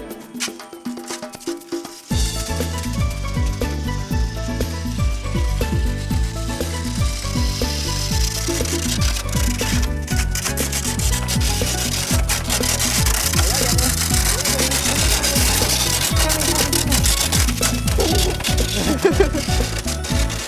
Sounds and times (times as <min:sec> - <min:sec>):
Music: 0:00.0 - 0:20.4
Speech: 0:13.4 - 0:17.3.